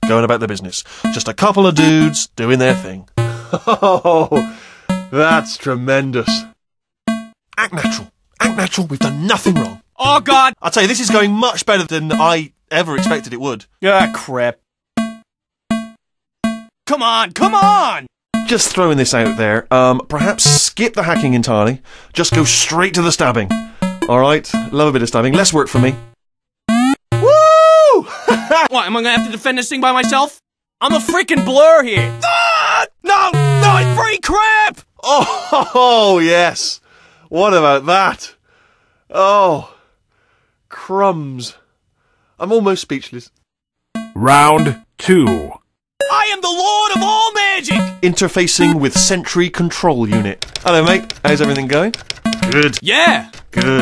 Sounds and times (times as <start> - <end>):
Speech: 0.1 - 3.0, 5.2 - 6.4, 7.6 - 14.6, 16.9 - 23.5, 24.1 - 26.0, 28.6 - 35.2, 35.8 - 38.4, 40.7 - 41.6, 42.4 - 43.3, 44.2 - 51.9, 52.5 - 53.8.